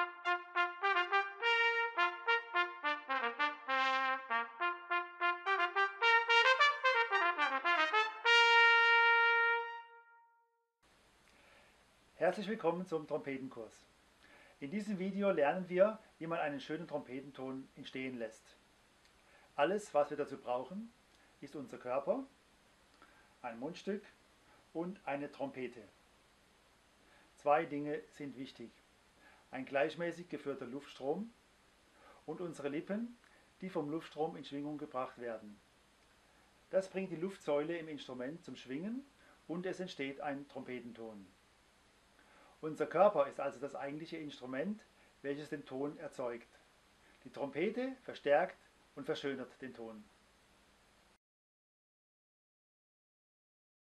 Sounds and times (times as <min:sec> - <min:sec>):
Speech: 0:12.2 - 0:13.9, 0:14.6 - 0:18.6, 0:19.6 - 0:22.3, 0:23.4 - 0:26.0, 0:27.4 - 0:28.8, 0:29.5 - 0:31.4, 0:32.3 - 0:35.6, 0:36.7 - 0:41.3, 0:42.6 - 0:46.6, 0:47.2 - 0:50.1.